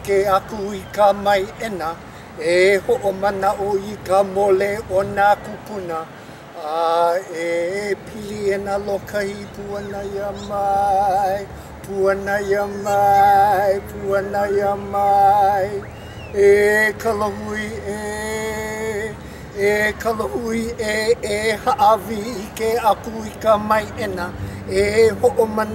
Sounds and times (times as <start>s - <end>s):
Mantra: 0.0s - 25.7s.